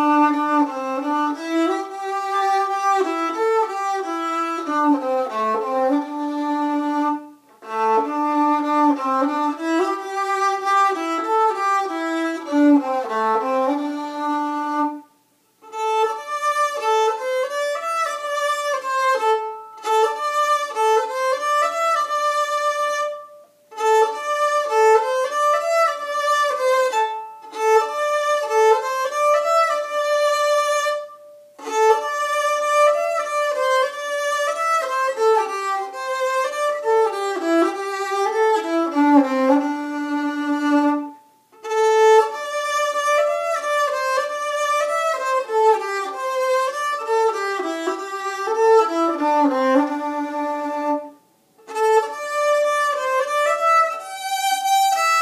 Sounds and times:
Violin, fiddle: 0.0s - 55.2s.

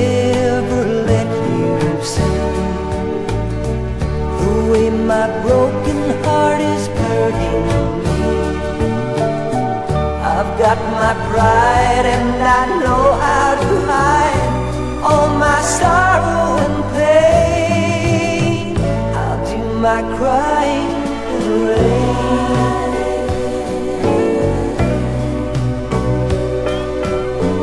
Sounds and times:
Music: 0.0s - 27.6s.

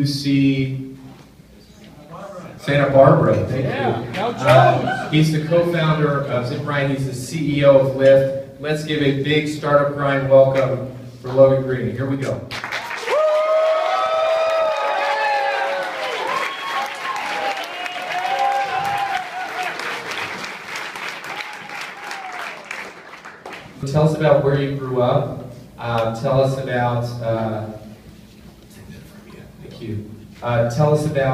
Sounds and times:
Speech: 0.0s - 0.9s, 1.9s - 12.5s, 23.8s - 27.8s, 28.7s - 31.3s.

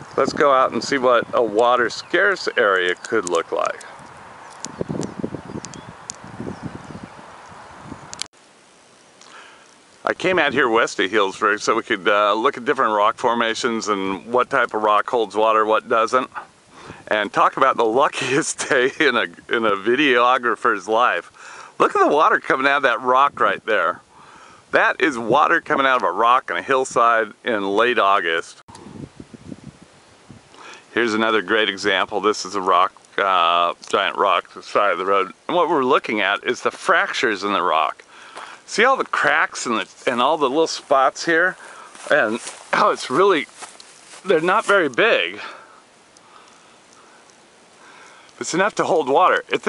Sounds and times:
Outside, rural or natural: 0.0s - 49.6s
Speech: 0.2s - 3.9s, 10.0s - 24.0s, 24.7s - 28.6s, 30.9s - 38.0s, 38.7s - 43.6s, 44.2s - 45.6s, 48.4s - 49.6s.

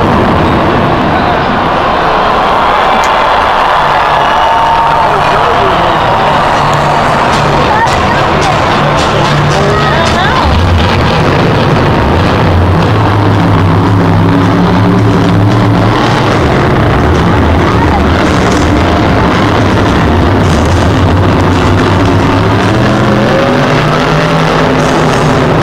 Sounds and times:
Vehicle: 0.0s - 25.6s
Speech: 5.0s - 6.2s, 7.5s - 10.7s, 17.6s - 18.5s.

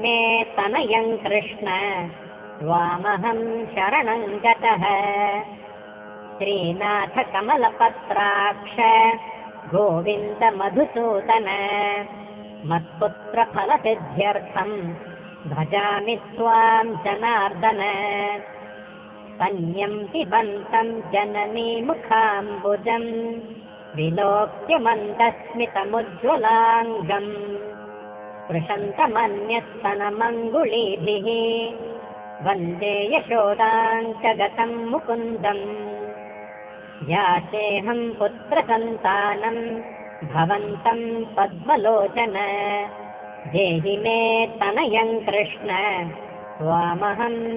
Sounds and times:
Mantra: 0.0s - 5.7s, 6.4s - 18.6s, 19.4s - 27.8s, 28.5s - 36.2s, 37.0s - 47.5s.

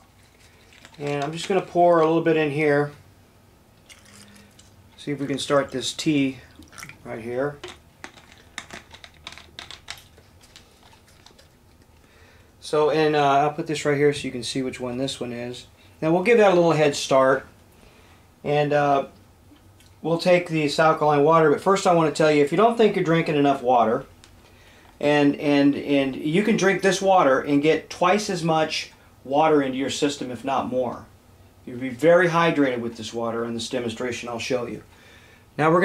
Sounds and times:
Liquid: 0.0s - 2.0s, 3.8s - 12.1s
Speech: 1.0s - 3.0s, 5.0s - 7.6s, 12.6s - 17.5s, 18.4s - 19.2s, 20.0s - 24.1s, 25.0s - 31.1s, 31.7s - 34.9s, 35.6s - 35.8s
Water: 3.9s - 8.8s, 10.0s - 12.0s.

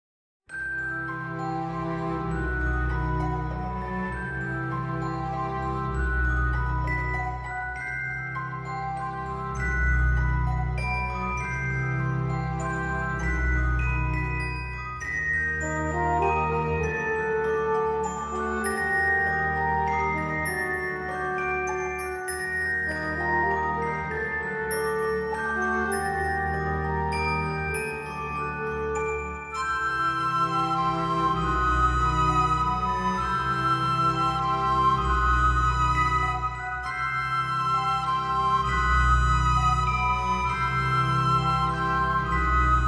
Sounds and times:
Glockenspiel: 0.5s - 42.8s.

